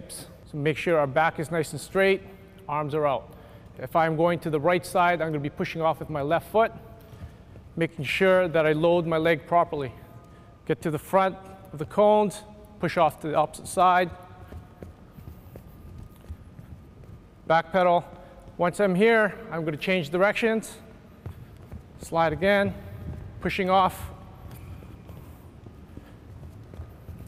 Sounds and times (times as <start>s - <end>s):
Speech: 0.0s - 6.8s, 7.8s - 10.0s, 10.7s - 14.2s, 17.5s - 20.8s, 22.0s - 22.8s, 23.4s - 24.2s.